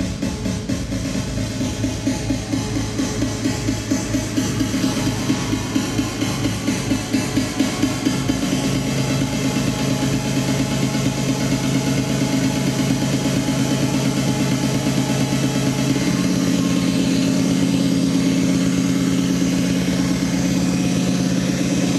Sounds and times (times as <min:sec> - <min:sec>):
House music: 0:00.0 - 0:21.9.